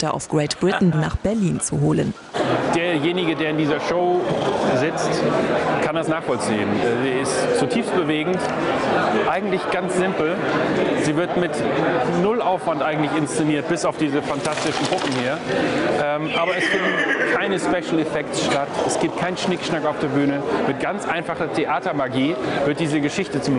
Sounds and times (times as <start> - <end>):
Speech: 2.8 - 23.5.